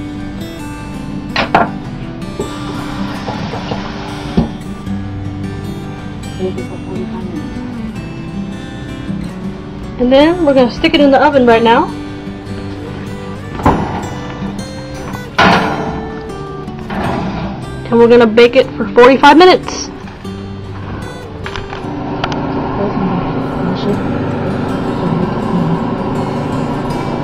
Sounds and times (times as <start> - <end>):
Music: 0.0 - 27.2
Speech: 17.9 - 19.9.